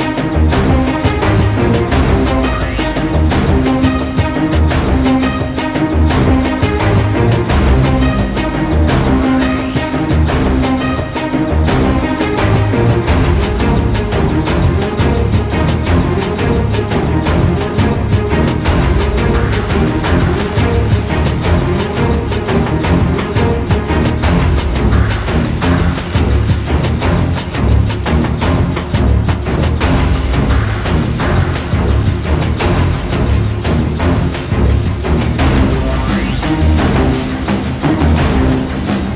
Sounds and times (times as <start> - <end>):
Music: 0.0 - 39.1.